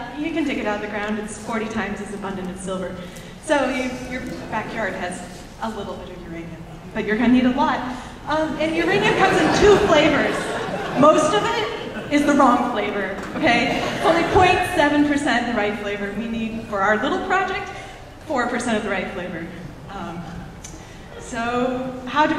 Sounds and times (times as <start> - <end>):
Speech: 0.0 - 20.5.